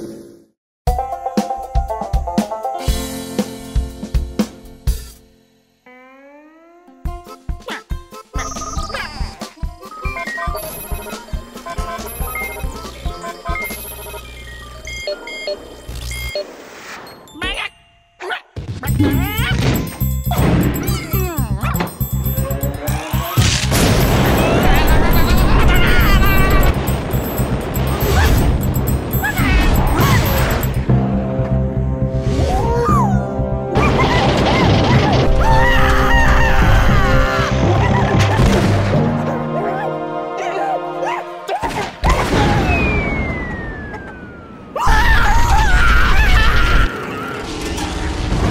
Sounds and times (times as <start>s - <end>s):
Music: 0.9s - 5.9s, 6.7s - 17.6s, 18.8s - 42.1s.